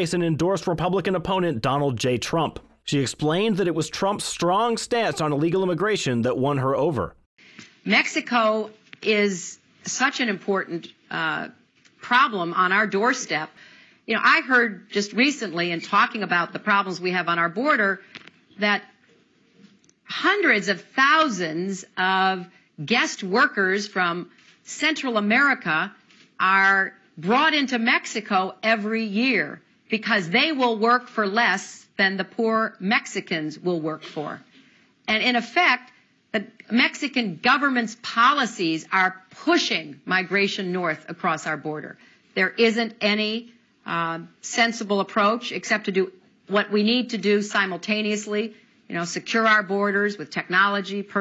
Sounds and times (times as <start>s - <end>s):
Speech: 0.0s - 7.2s, 7.9s - 13.5s, 20.1s - 34.4s, 35.1s - 51.2s.